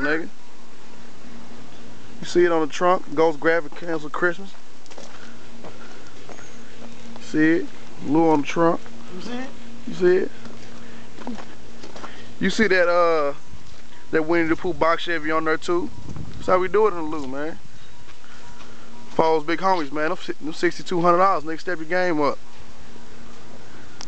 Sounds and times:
Speech: 0.0s - 0.3s, 2.2s - 4.6s, 7.2s - 10.4s, 12.4s - 13.4s, 14.1s - 17.6s, 19.2s - 22.4s.

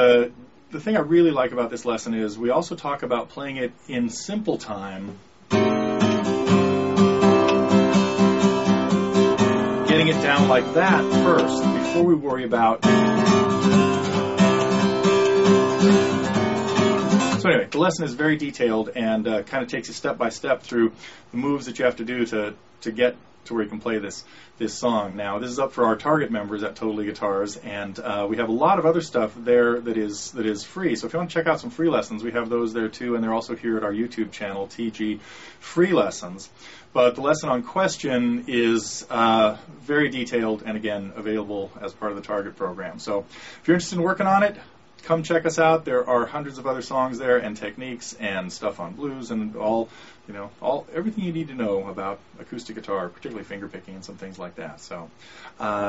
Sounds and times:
Speech: 0.0s - 5.2s, 9.9s - 12.9s, 17.4s - 55.8s
Acoustic guitar: 4.7s - 21.3s
Rock music: 5.6s - 11.9s, 12.9s - 17.4s.

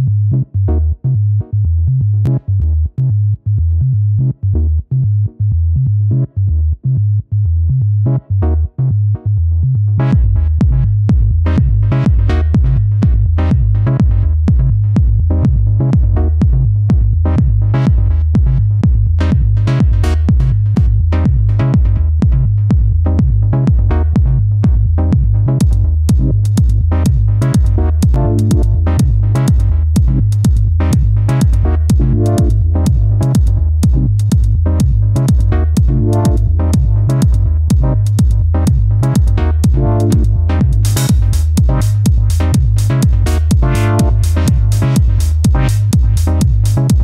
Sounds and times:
Music: 0.0s - 47.0s.

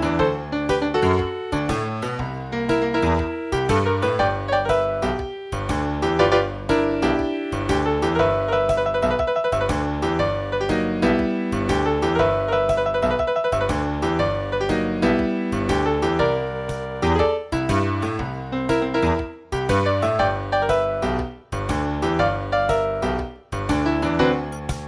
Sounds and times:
Tender music: 0.0s - 24.8s.

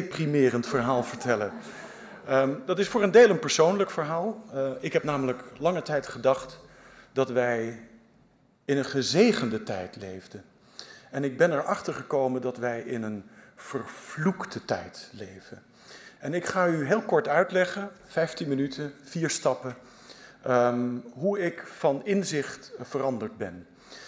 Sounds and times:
Male speech, man speaking: 0.0s - 1.6s, 2.3s - 6.6s, 7.2s - 7.9s, 8.7s - 10.5s, 11.1s - 15.6s, 16.2s - 19.8s, 20.4s - 23.7s
Narration, monologue: 0.0s - 24.0s.

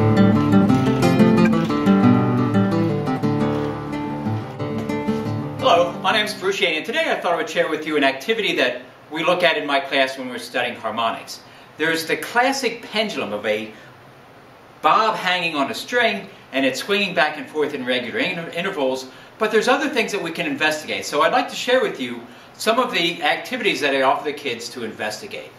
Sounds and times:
Music: 0.0s - 6.4s
Speech: 5.6s - 13.8s, 14.8s - 25.5s.

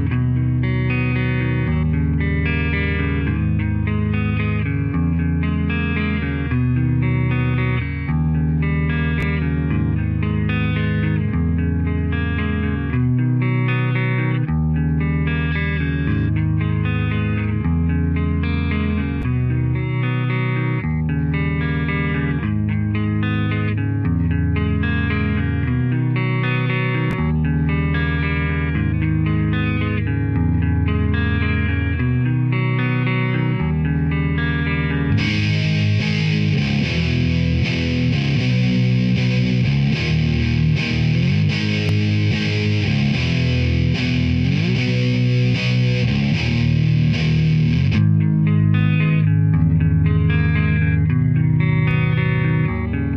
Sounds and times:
Strum: 0.0s - 53.1s.

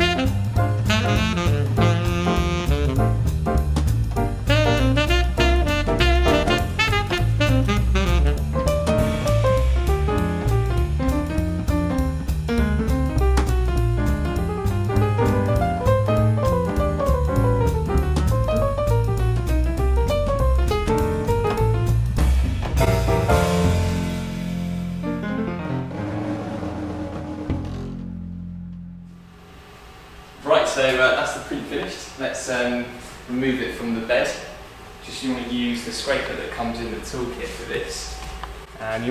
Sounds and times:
Music: 0.0s - 29.6s.

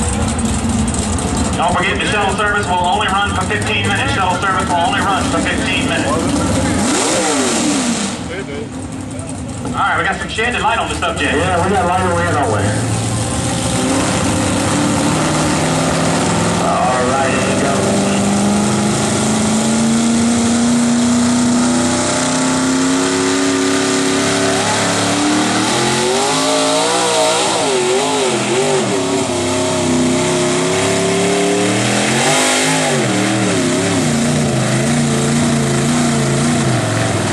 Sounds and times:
Truck: 0.0s - 37.3s.

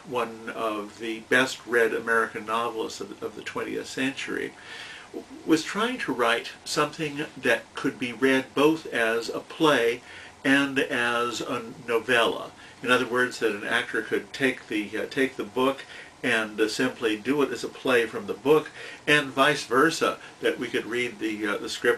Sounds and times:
Speech: 0.0s - 4.6s, 5.2s - 21.9s.

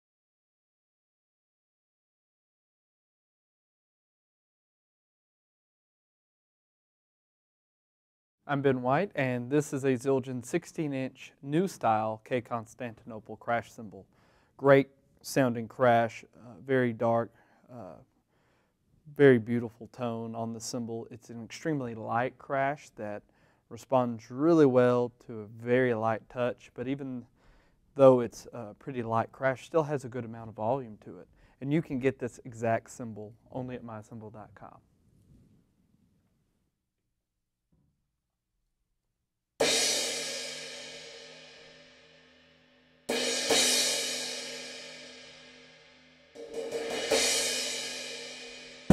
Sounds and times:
Speech: 8.5s - 18.1s, 19.1s - 27.3s, 28.0s - 34.8s.

